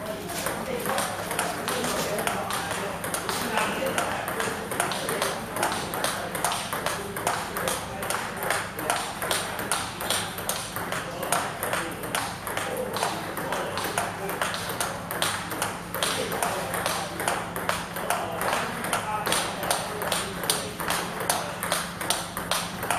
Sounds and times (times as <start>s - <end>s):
Speech: 0.0s - 21.9s.